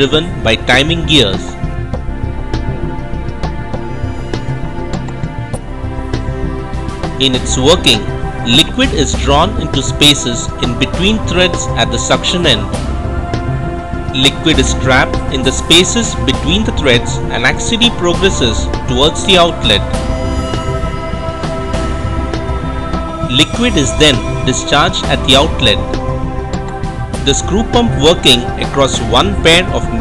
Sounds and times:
Speech: 0.0 - 1.6, 7.2 - 12.7, 14.2 - 19.9, 23.3 - 25.8, 27.3 - 30.0
Music: 0.0 - 30.0.

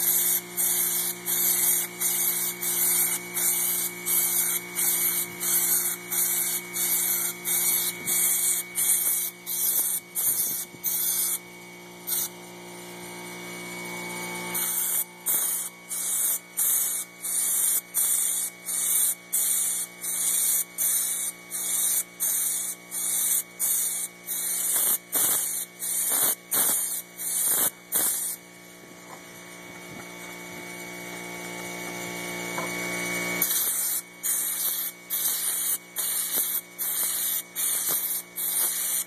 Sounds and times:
Spray: 0.0 - 11.4, 12.0 - 12.4, 14.5 - 28.5, 33.4 - 39.0.

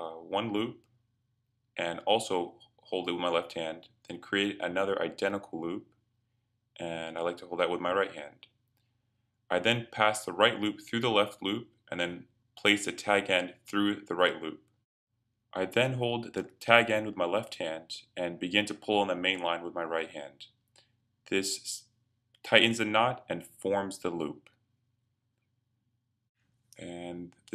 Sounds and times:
Speech: 0.0 - 0.8, 1.8 - 5.8, 6.8 - 8.5, 9.5 - 14.7, 15.6 - 20.5, 21.3 - 21.8, 22.5 - 24.5, 26.8 - 27.5.

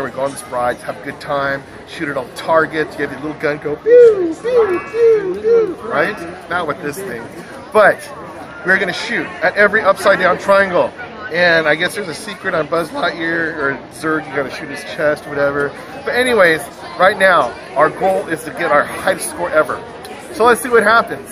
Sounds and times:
Inside, public space: 0.0 - 21.3.

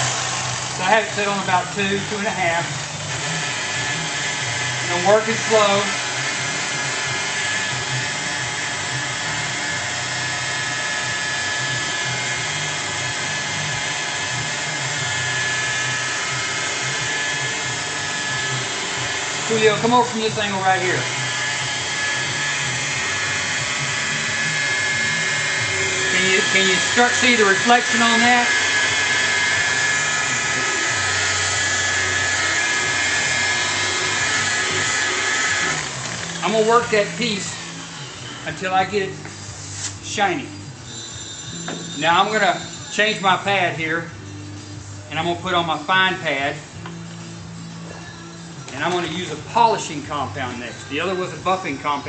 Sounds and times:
Speech: 0.8 - 2.7, 4.9 - 6.0, 19.5 - 21.1, 26.2 - 28.5, 36.4 - 37.6, 38.5 - 39.2, 48.7 - 52.0.

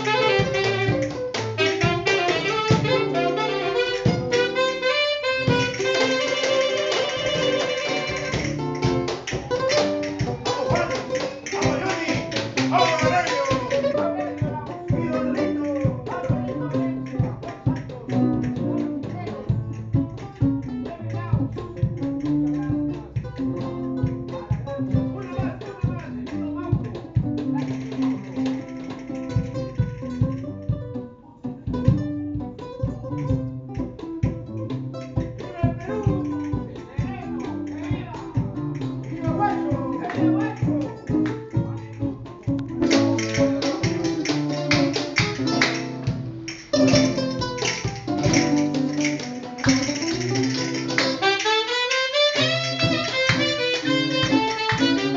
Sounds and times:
Brass instrument: 0.0 - 8.7, 48.4 - 55.1
Saxophone: 0.0 - 8.9, 49.6 - 55.1.

